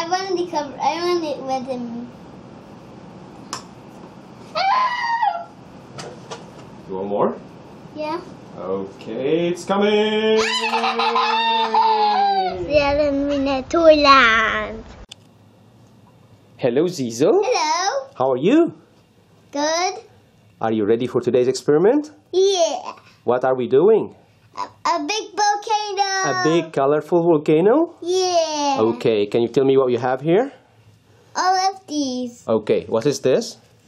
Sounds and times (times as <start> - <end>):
Child speech, kid speaking: 0.0 - 2.2, 7.9 - 8.4, 12.5 - 14.9, 17.4 - 18.2, 19.5 - 20.1, 22.3 - 23.1, 24.6 - 26.8, 28.0 - 29.2, 31.4 - 32.5.